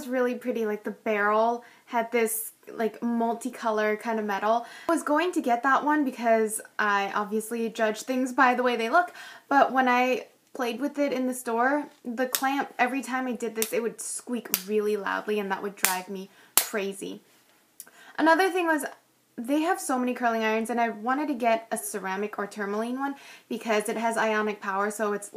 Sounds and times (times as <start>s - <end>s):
Speech: 0.0s - 17.2s, 18.2s - 25.3s.